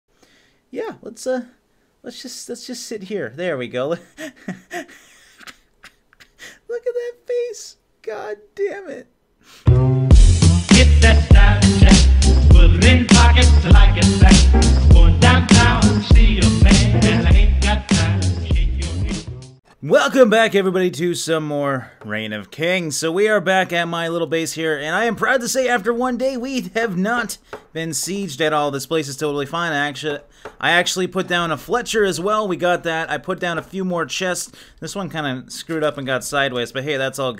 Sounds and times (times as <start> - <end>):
Speech: 0.7 - 4.0, 6.7 - 9.1, 19.8 - 37.3
Music: 9.6 - 19.6.